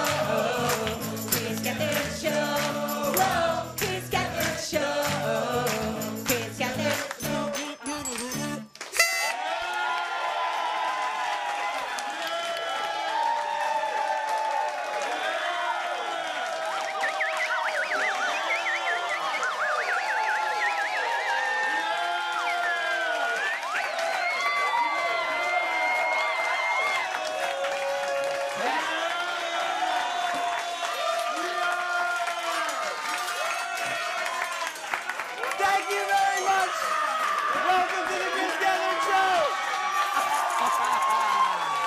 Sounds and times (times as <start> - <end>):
Music: 0.0 - 9.4.